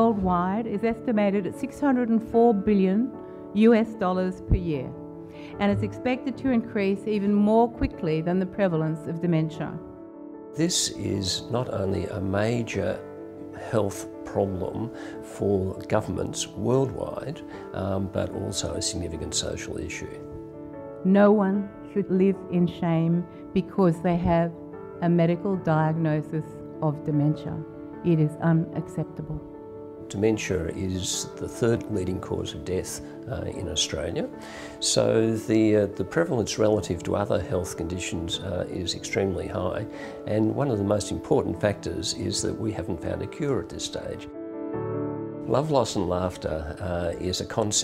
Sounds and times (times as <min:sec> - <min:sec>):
Music: 0:00.0 - 0:47.8.